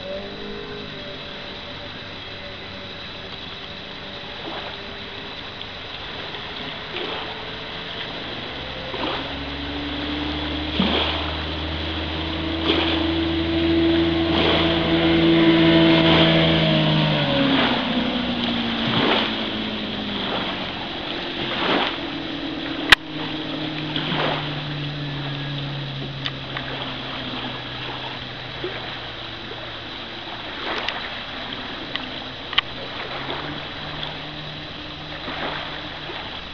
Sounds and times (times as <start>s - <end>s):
Motorboat, speedboat: 0.0s - 36.5s.